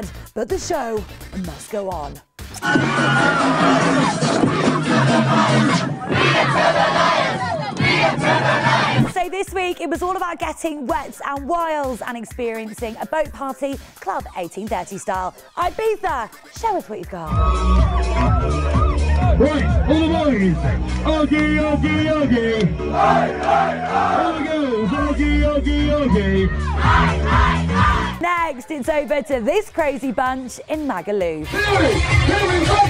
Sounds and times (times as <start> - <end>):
Music: 0.0 - 32.9.